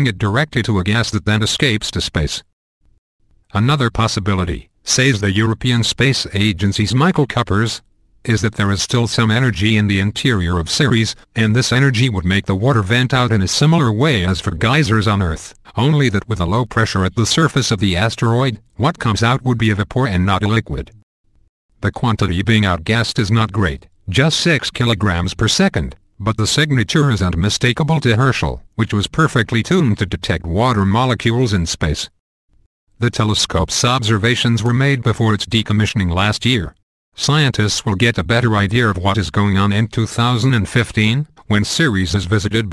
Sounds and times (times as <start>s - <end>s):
Speech: 0.0s - 2.5s, 3.5s - 21.0s, 21.8s - 32.2s, 33.0s - 42.7s.